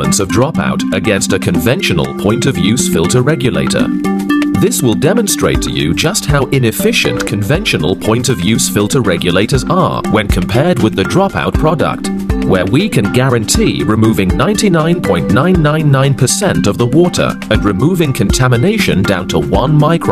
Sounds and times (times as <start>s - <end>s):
Speech: 0.0s - 4.0s, 4.6s - 20.1s
Music: 0.0s - 20.1s.